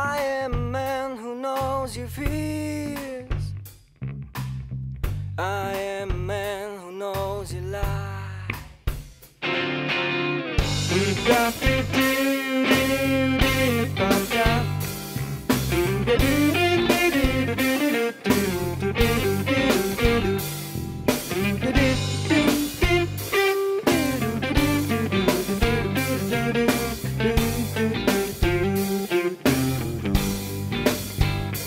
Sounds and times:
Music: 0.0 - 31.6.

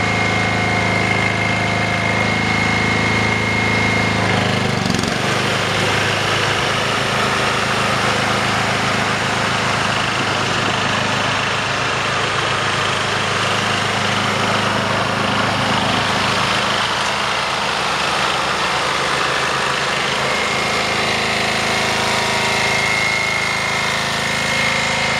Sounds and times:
Idling: 0.0 - 25.1
Outside, urban or manmade: 0.0 - 25.1
Vehicle: 0.0 - 25.1.

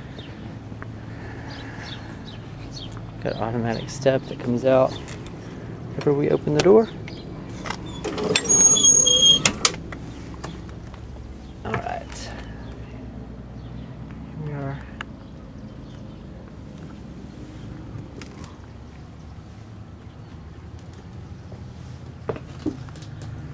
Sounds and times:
Speech: 3.2 - 5.0, 6.0 - 7.0, 11.6 - 12.5, 14.4 - 15.0.

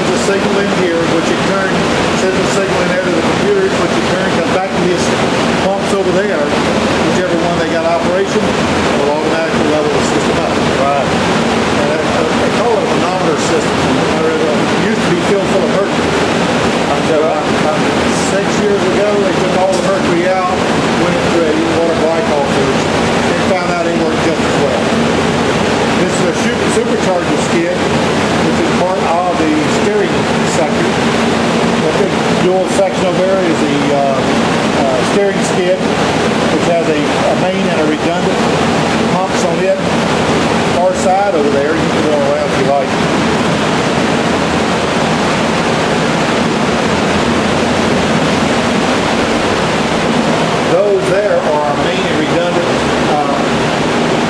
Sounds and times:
Speech: 0.0 - 11.2, 11.8 - 16.1, 16.9 - 25.0, 25.9 - 31.0, 31.8 - 35.9, 36.5 - 38.5, 39.1 - 39.9, 40.7 - 43.0, 50.6 - 53.6.

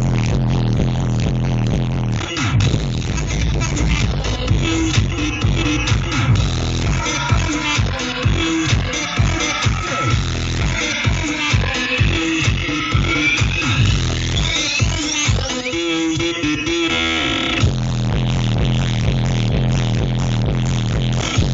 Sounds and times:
Music: 0.0 - 21.5.

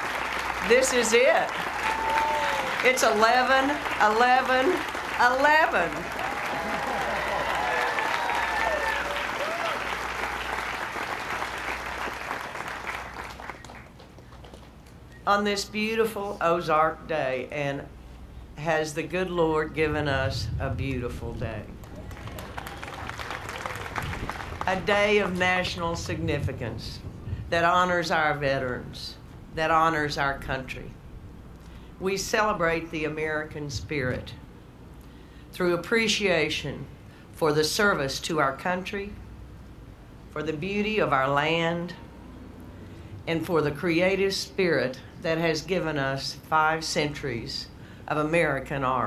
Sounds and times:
Narration, monologue: 0.5 - 1.6, 2.7 - 6.1, 14.7 - 22.0, 24.6 - 49.0
Female speech, woman speaking: 0.6 - 1.6, 2.8 - 6.0, 15.3 - 17.9, 18.6 - 21.8, 24.7 - 30.9, 32.0 - 34.4, 35.6 - 39.2, 40.4 - 42.0, 43.3 - 49.0.

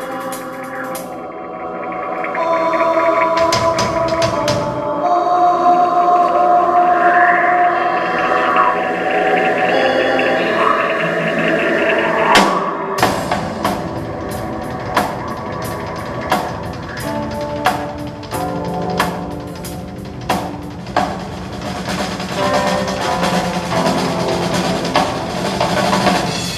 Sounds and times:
Drum kit: 0.0 - 5.4, 12.2 - 26.5
Cymbal: 12.2 - 26.5
Bass drum: 13.0 - 26.5.

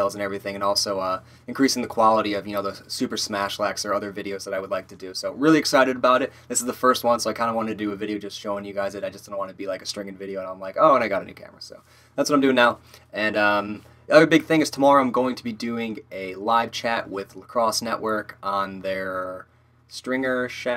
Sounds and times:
Speech: 0.0 - 20.7.

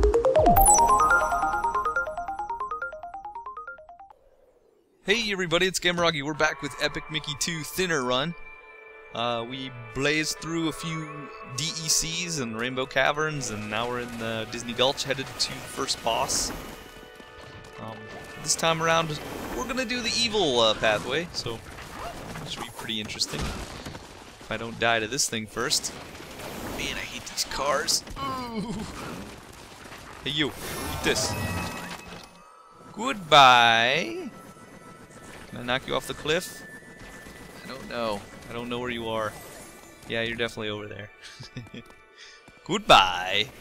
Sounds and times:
Music: 0.0 - 4.2, 5.9 - 21.0, 31.9 - 43.6
Speech: 5.1 - 8.4, 9.2 - 16.5, 17.8 - 21.6, 33.0 - 34.3, 42.7 - 43.5.

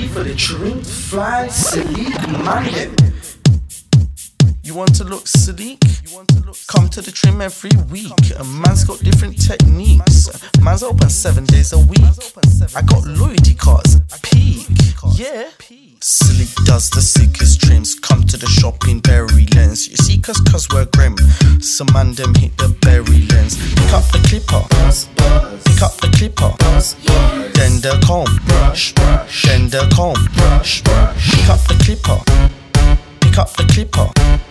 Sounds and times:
Music: 2.6 - 15.2, 16.1 - 34.5.

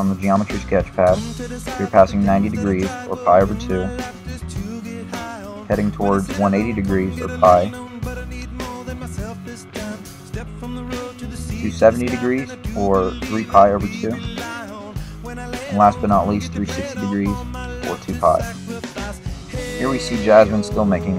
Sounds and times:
Speech: 0.0 - 4.0, 5.7 - 7.8, 11.5 - 14.3, 15.7 - 18.5, 19.6 - 21.1
Music: 0.0 - 21.1.

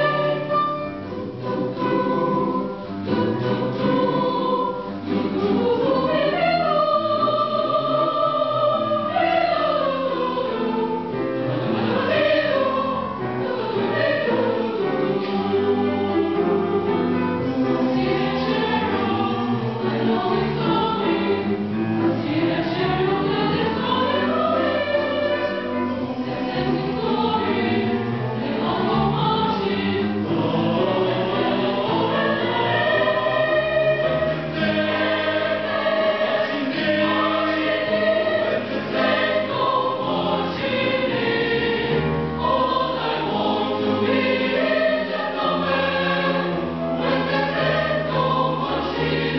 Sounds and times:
Choir: 0.0 - 49.3.

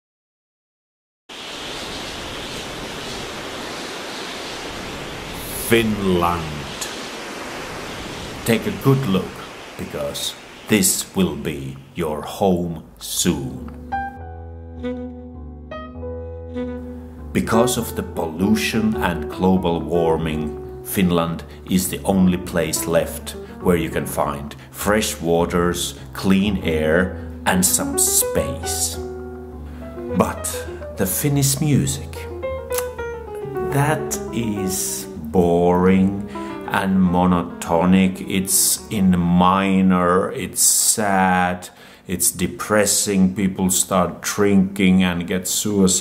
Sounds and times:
Outside, rural or natural: 1.3 - 10.7
Speech: 5.4 - 6.9, 8.4 - 13.7, 17.3 - 29.0, 30.1 - 32.2, 33.7 - 46.0.

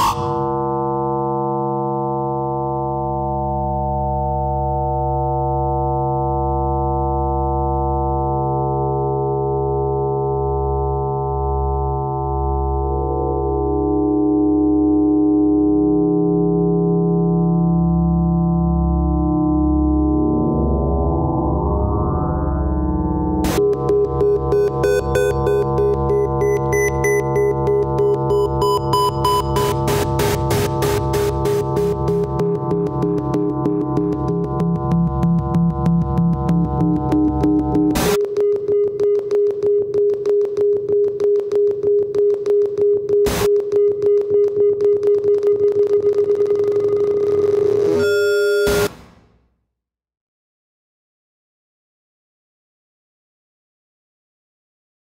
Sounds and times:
Synthesizer: 0.0 - 49.4.

